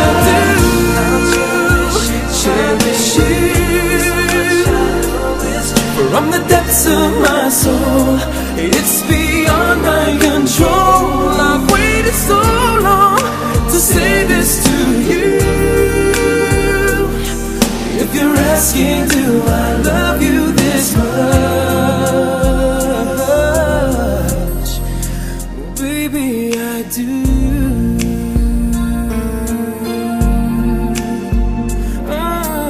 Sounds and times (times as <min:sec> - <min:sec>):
Pop music: 0:00.0 - 0:32.6.